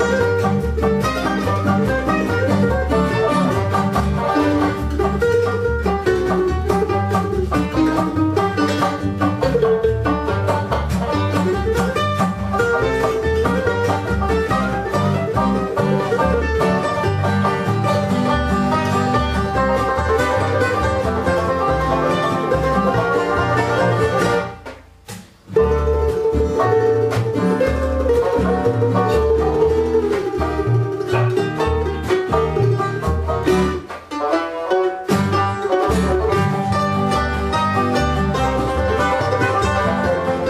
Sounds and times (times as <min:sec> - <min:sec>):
Banjo: 0:00.0 - 0:40.4
Guitar: 0:00.0 - 0:40.4.